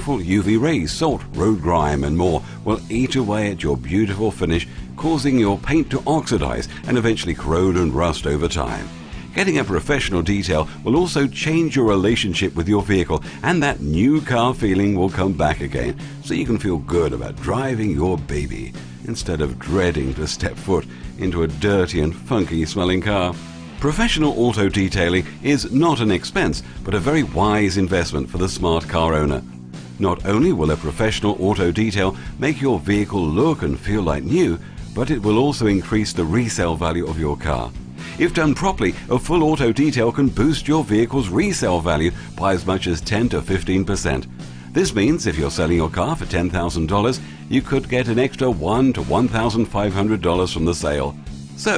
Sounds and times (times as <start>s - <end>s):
Speech: 0.0s - 29.4s, 30.0s - 51.7s
Music: 0.0s - 51.7s.